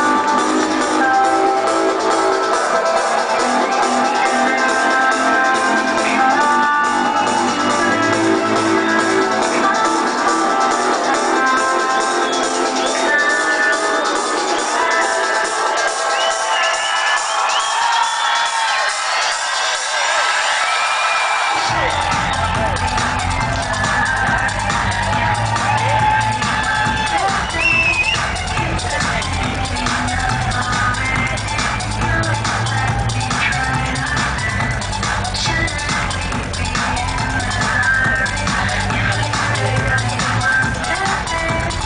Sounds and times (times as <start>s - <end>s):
Techno: 0.0s - 41.8s.